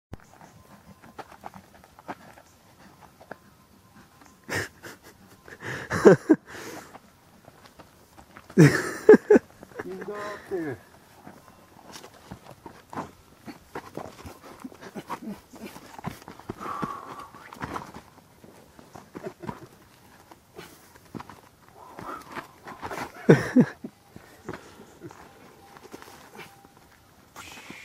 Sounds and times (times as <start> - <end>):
Walk, footsteps: 0.2 - 3.5, 11.1 - 23.4.